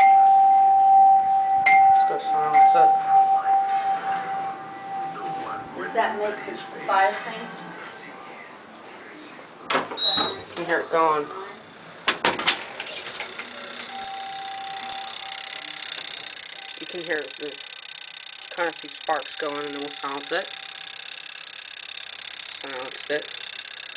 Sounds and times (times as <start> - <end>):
Doorbell: 0.0 - 5.5, 13.8 - 16.1.